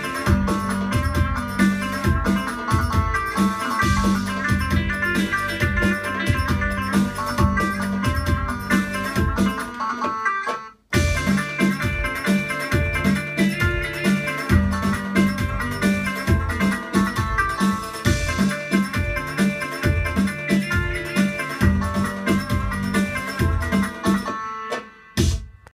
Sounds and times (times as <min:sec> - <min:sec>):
Music: 0:00.0 - 0:25.7.